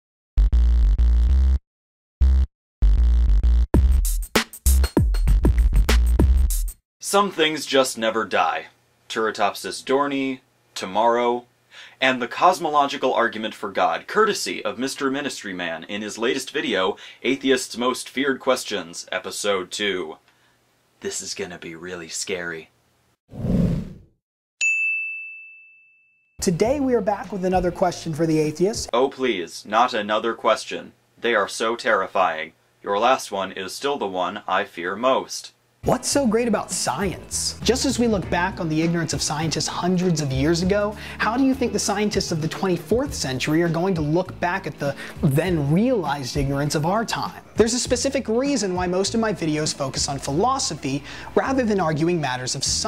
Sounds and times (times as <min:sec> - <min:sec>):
Drum machine: 0:02.8 - 0:06.8, 0:26.4 - 0:28.9, 0:42.2 - 0:44.2, 0:47.6 - 0:48.1
Speech: 0:07.0 - 0:20.2, 0:21.0 - 0:22.7, 0:26.4 - 0:52.8.